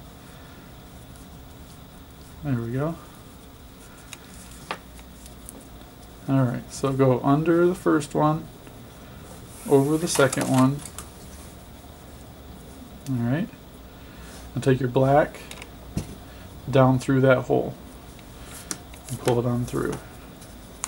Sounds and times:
Speech: 0:06.3 - 0:08.5, 0:09.6 - 0:10.9, 0:13.1 - 0:13.6, 0:14.6 - 0:15.5, 0:16.7 - 0:17.8, 0:19.1 - 0:20.1.

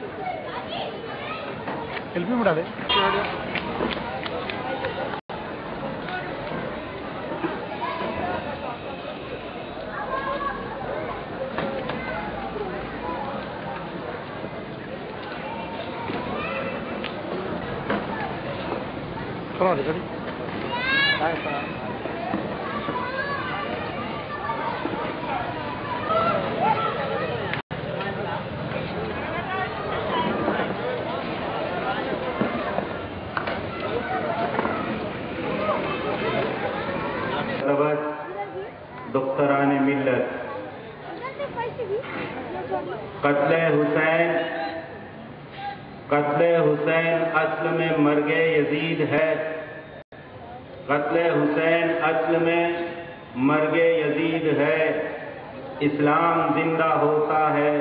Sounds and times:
Male speech, man speaking: 0:02.2 - 0:03.3, 0:19.6 - 0:20.0, 0:37.6 - 0:38.5, 0:39.1 - 0:40.5, 0:43.2 - 0:44.8, 0:46.1 - 0:49.7, 0:50.9 - 0:55.2, 0:55.8 - 0:57.8.

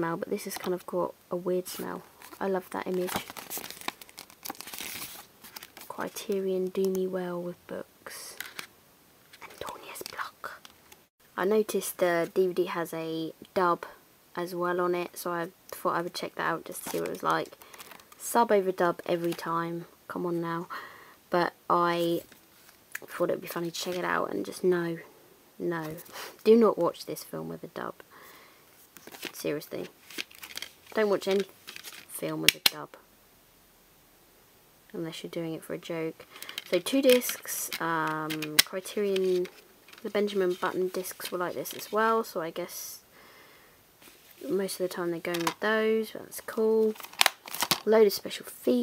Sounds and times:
Speech: 0:00.0 - 0:03.3, 0:05.9 - 0:08.4, 0:11.4 - 0:17.6, 0:18.2 - 0:20.7, 0:21.3 - 0:22.3, 0:23.0 - 0:28.0, 0:29.3 - 0:29.9, 0:31.0 - 0:31.5, 0:32.1 - 0:33.0, 0:34.9 - 0:43.0, 0:44.4 - 0:47.0, 0:47.8 - 0:48.8
Inside, small room: 0:00.0 - 0:48.8.

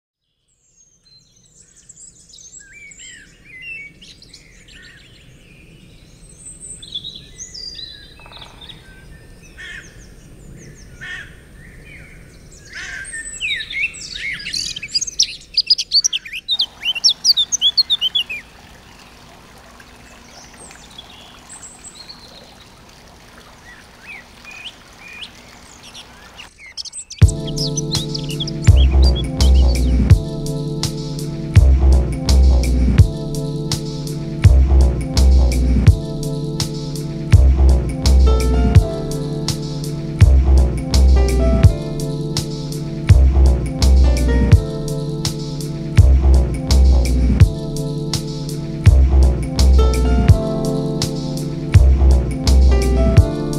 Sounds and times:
Bird vocalization, bird call, bird song: 0:00.2 - 0:19.2, 0:20.0 - 0:22.8, 0:23.4 - 0:30.1
Outside, rural or natural: 0:00.2 - 0:53.5.

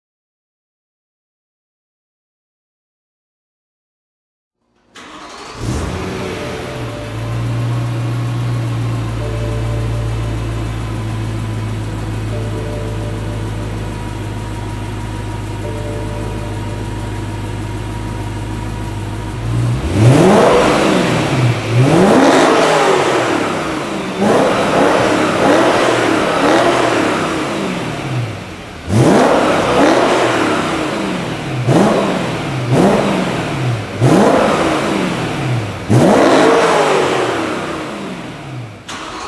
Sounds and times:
Car: 0:04.6 - 0:39.2.

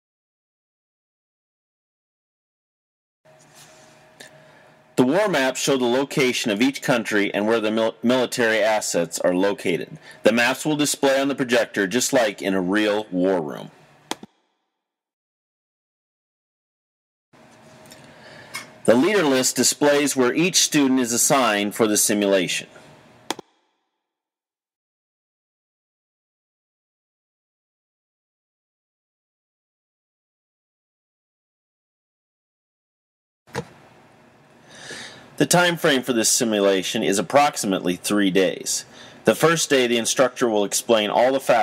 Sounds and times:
Speech: 0:05.0 - 0:13.8, 0:18.9 - 0:22.8, 0:35.4 - 0:41.6.

